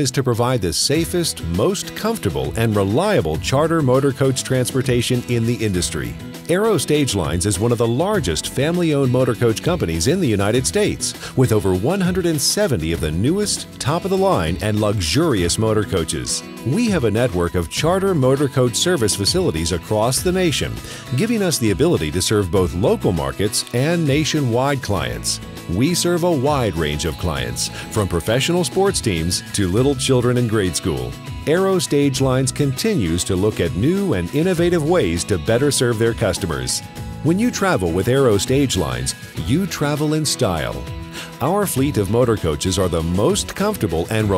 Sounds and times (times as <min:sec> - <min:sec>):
Music: 0:00.0 - 0:44.3
Speech: 0:00.0 - 0:44.3.